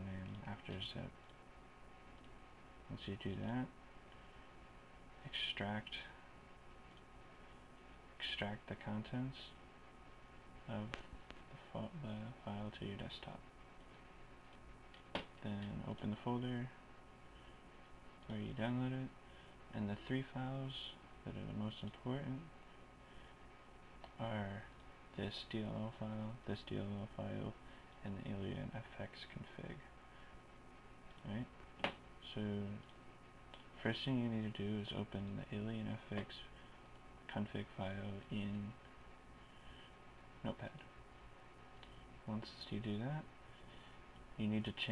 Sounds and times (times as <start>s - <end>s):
Speech: 0.0s - 1.2s, 2.9s - 3.8s, 5.2s - 6.2s, 8.2s - 9.6s, 10.6s - 13.5s, 15.4s - 16.8s, 18.2s - 22.6s, 24.1s - 29.9s, 31.2s - 31.6s, 32.2s - 32.9s, 33.6s - 36.6s, 37.3s - 38.8s, 40.4s - 40.9s, 42.2s - 43.3s, 44.4s - 44.9s.